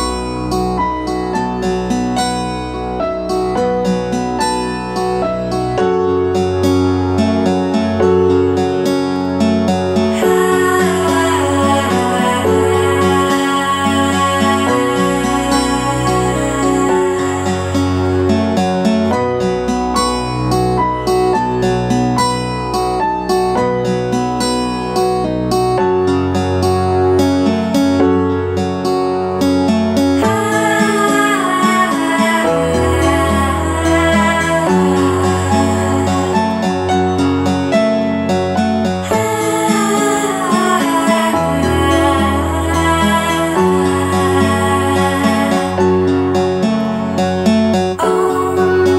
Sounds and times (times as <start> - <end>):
Music: 0.0 - 48.9.